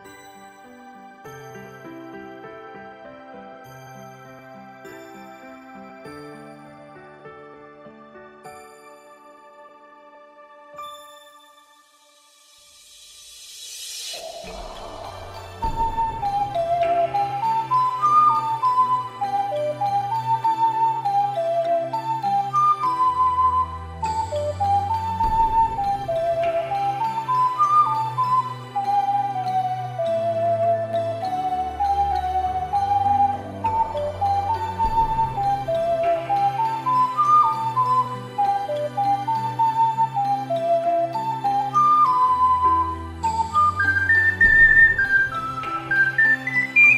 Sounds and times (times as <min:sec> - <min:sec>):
Flute: 0:00.0 - 0:46.9.